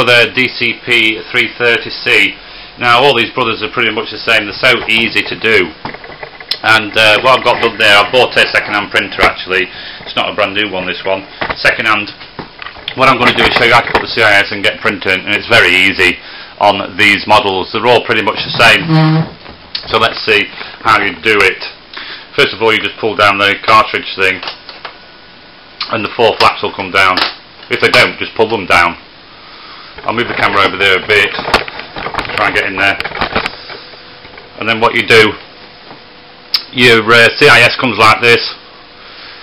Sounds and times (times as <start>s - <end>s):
Speech: 0.0s - 5.8s, 6.5s - 12.2s, 12.9s - 24.5s, 25.8s - 29.0s, 30.0s - 31.5s, 32.2s - 33.1s, 34.6s - 35.4s, 36.6s - 38.6s.